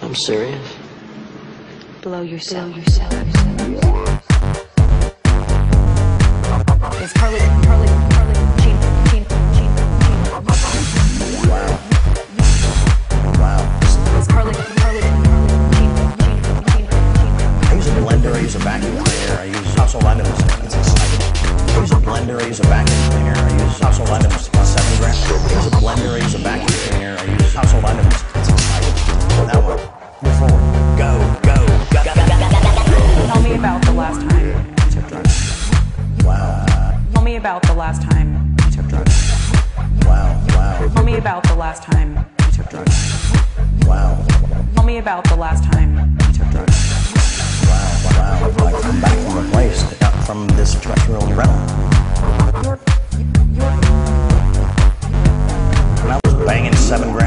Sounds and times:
Speech: 0.0 - 0.8, 2.0 - 4.2, 7.0 - 10.2, 11.4 - 12.6, 13.3 - 17.0, 17.6 - 28.8, 29.5 - 35.4, 36.2 - 39.1, 40.0 - 43.0, 43.8 - 46.8, 47.6 - 51.8, 56.0 - 57.2
Dubstep: 2.8 - 36.4, 46.5 - 57.2.

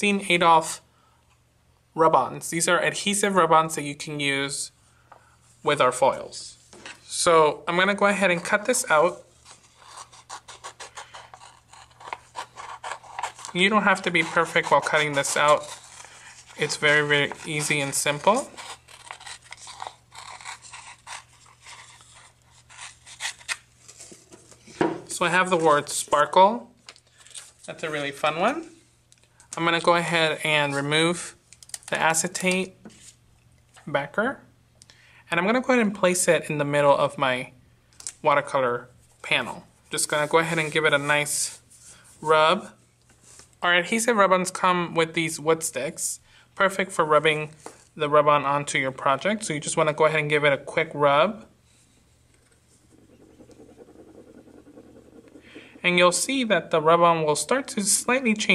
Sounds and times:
Rub: 9.2 - 23.5, 52.4 - 56.2.

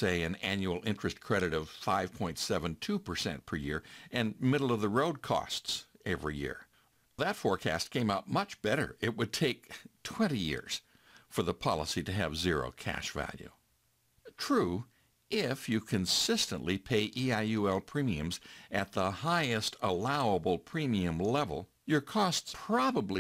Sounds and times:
Narration, monologue: 0.0 - 23.2.

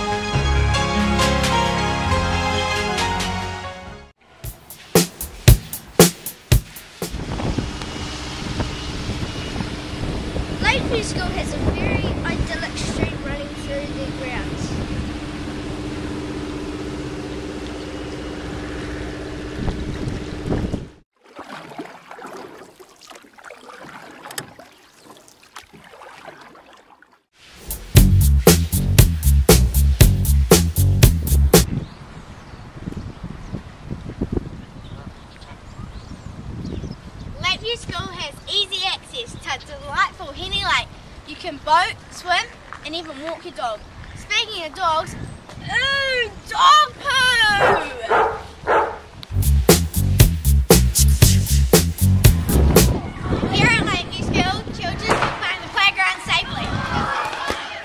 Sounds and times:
Music: 0.0 - 7.2, 27.6 - 31.7, 49.4 - 53.0
Outside, rural or natural: 0.0 - 57.8.

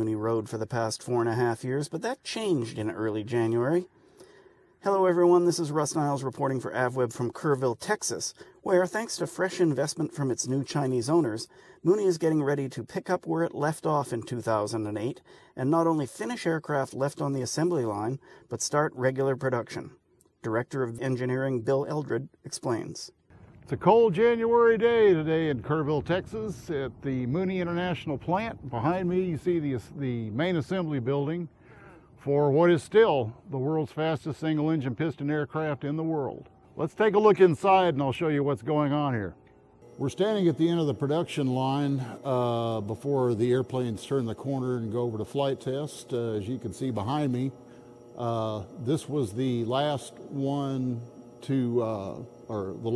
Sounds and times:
Speech: 0.0 - 3.9, 4.8 - 31.5, 32.2 - 39.4, 40.0 - 47.6, 48.2 - 52.9.

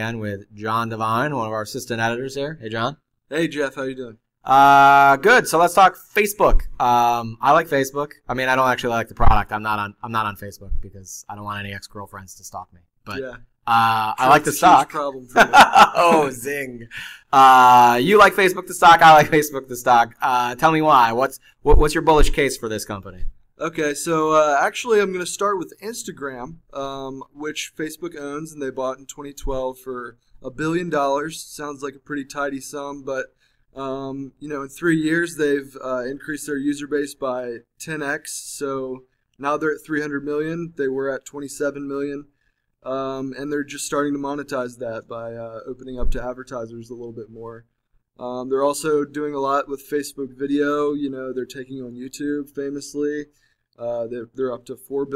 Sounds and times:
Speech: 0.0 - 47.6, 48.2 - 55.1.

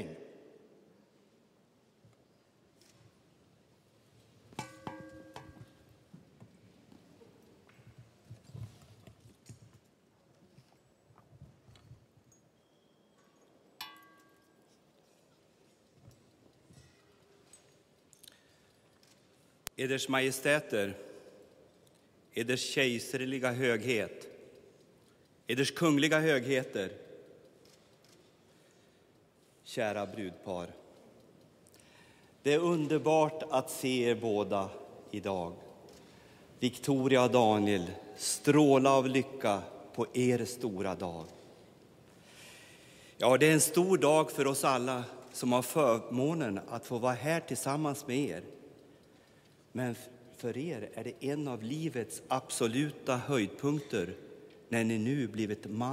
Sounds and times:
Male speech, man speaking: 0.0 - 0.3, 19.8 - 21.1, 22.4 - 24.3, 25.5 - 27.0, 29.7 - 30.8, 32.4 - 35.6, 36.6 - 41.4, 43.2 - 48.5, 49.8 - 55.9
Narration, monologue: 0.0 - 55.9.

